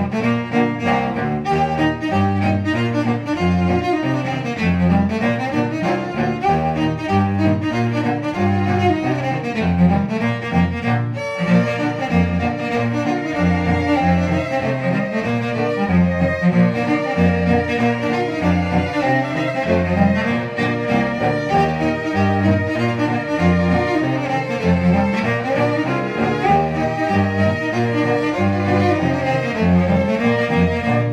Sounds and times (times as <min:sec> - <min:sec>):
Cello: 0:00.0 - 0:31.1.